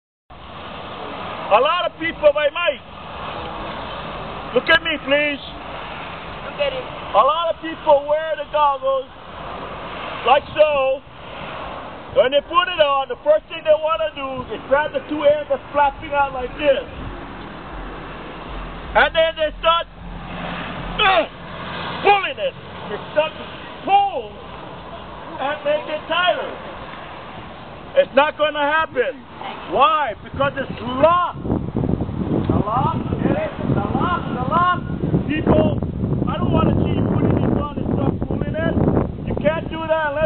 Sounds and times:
Speech: 1.5s - 2.8s, 4.6s - 5.6s, 6.5s - 9.1s, 10.3s - 11.0s, 12.2s - 17.0s, 19.0s - 19.9s, 22.0s - 24.4s, 25.4s - 26.6s, 28.0s - 31.4s, 32.5s - 40.2s.

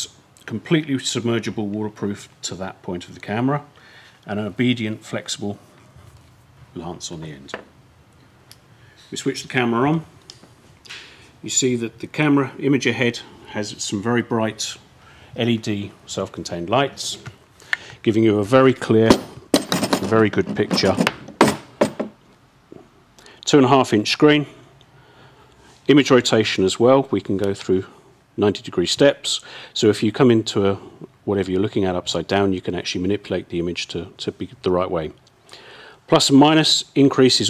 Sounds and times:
Tools: 19.1s - 22.1s.

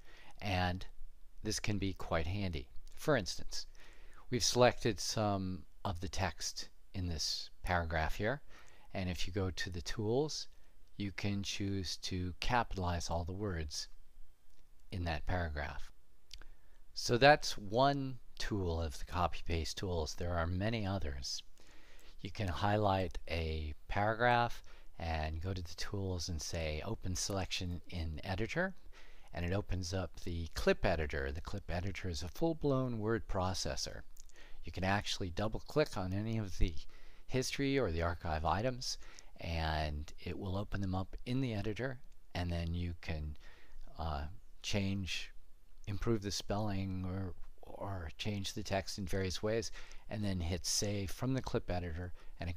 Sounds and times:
Speech: 0.4s - 3.7s, 4.3s - 14.0s, 14.9s - 16.0s, 17.0s - 21.5s, 22.2s - 52.5s.

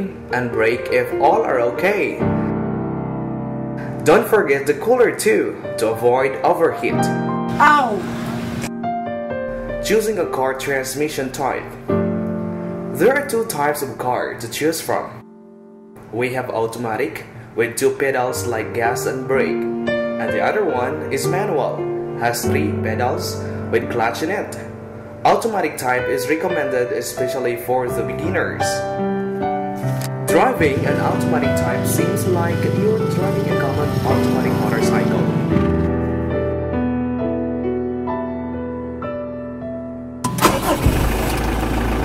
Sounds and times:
Speech: 0.0s - 2.2s, 4.0s - 8.1s, 9.8s - 11.7s, 13.0s - 15.2s, 16.1s - 19.6s, 20.2s - 28.8s, 30.3s - 35.3s
Music: 0.0s - 41.0s.

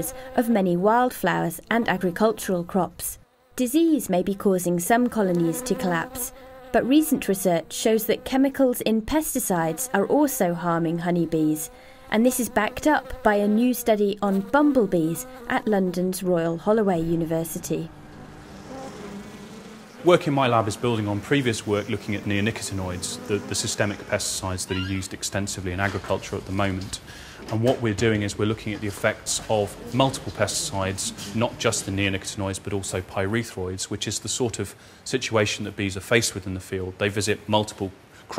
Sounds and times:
Speech: 0.0s - 17.9s, 20.0s - 38.3s
Buzz: 0.0s - 27.1s, 28.6s - 33.2s.

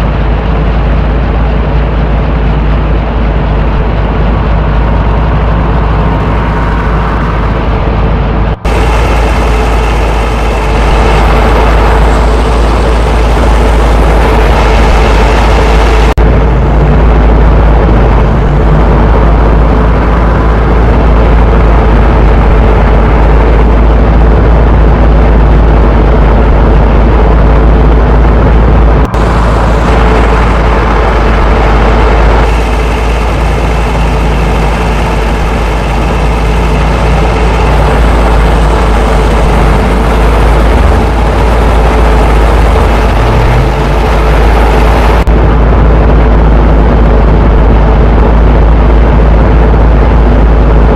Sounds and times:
Car: 0.0s - 50.9s.

